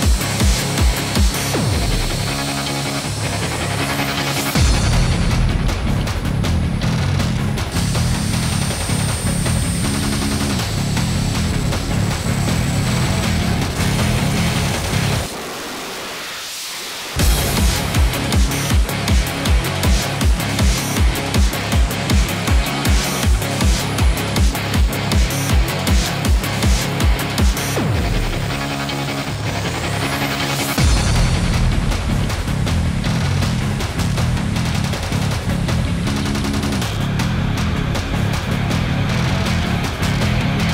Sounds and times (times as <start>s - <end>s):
Music: 0.0s - 40.7s.